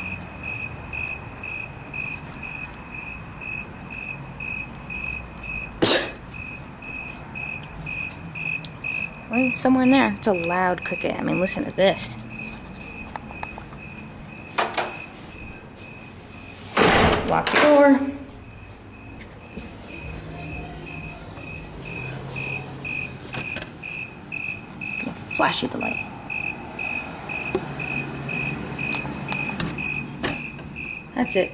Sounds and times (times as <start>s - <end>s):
Cricket: 0.0s - 31.5s.